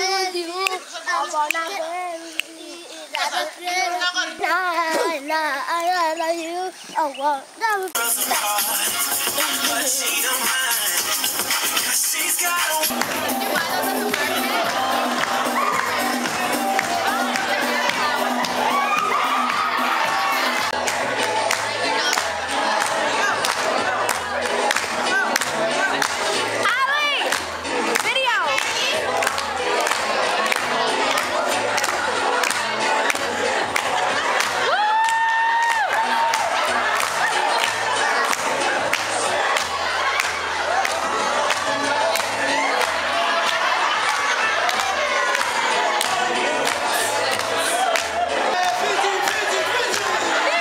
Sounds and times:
Inside, large room or hall: 0:07.9 - 0:50.6
Music: 0:08.0 - 0:50.6.

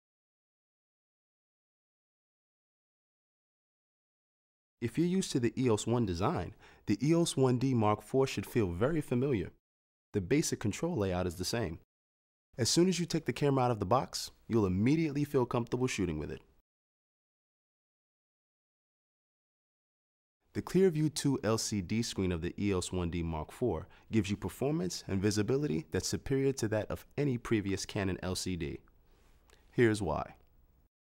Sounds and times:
Speech: 0:04.8 - 0:09.6, 0:10.2 - 0:11.9, 0:12.6 - 0:16.5, 0:20.5 - 0:28.9, 0:29.7 - 0:30.5.

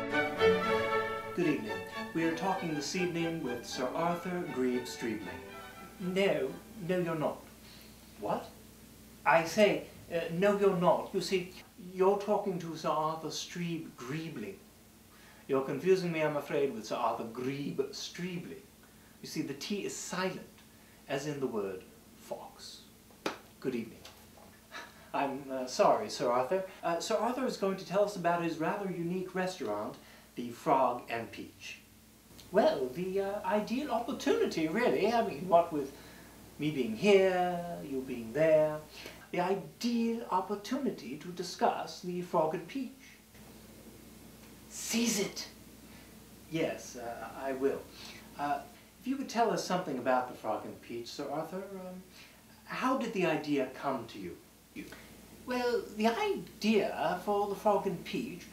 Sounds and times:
Speech: 0:01.4 - 0:05.4, 0:06.0 - 0:07.5, 0:08.2 - 0:08.6, 0:09.2 - 0:14.6, 0:15.5 - 0:22.9, 0:23.6 - 0:24.1, 0:24.8 - 0:36.0, 0:36.6 - 0:43.2, 0:44.7 - 0:45.6, 0:46.5 - 0:58.5.

